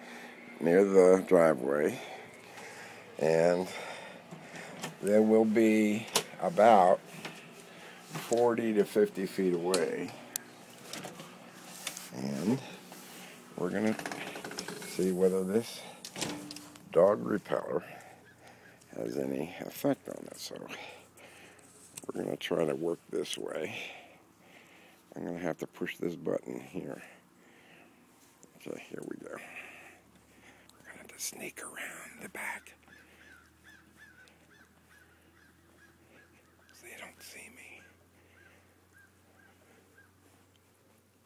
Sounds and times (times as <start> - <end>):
Speech: 0.6 - 2.2, 3.2 - 3.8, 5.0 - 7.0, 8.3 - 10.2, 12.1 - 12.7, 13.6 - 14.0, 14.9 - 15.9, 16.9 - 18.0, 18.9 - 20.9, 22.1 - 24.0, 25.1 - 27.1, 28.6 - 29.5.